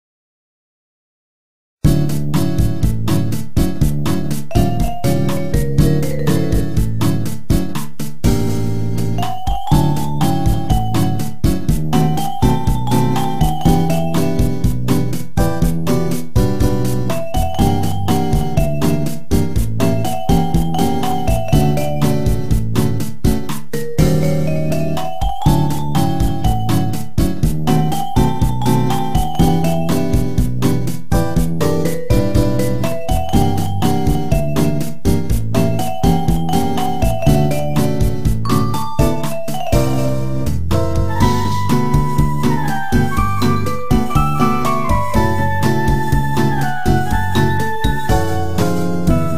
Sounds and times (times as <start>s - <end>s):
Music: 1.8s - 49.3s.